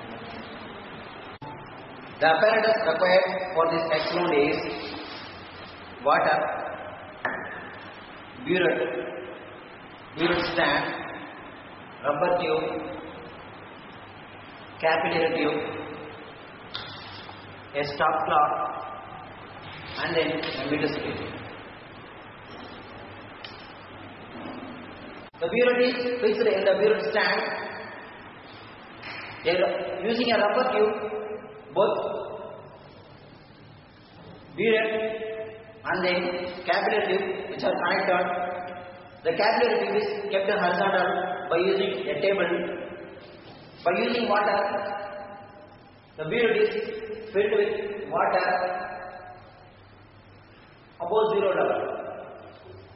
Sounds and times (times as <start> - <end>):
Speech: 2.2 - 5.0, 8.4 - 9.2, 10.2 - 11.3, 12.0 - 13.1, 14.8 - 16.1, 17.7 - 19.2, 19.9 - 21.4, 25.4 - 27.8, 29.4 - 32.6, 34.6 - 43.0, 43.8 - 45.2, 46.2 - 49.2, 51.0 - 52.5.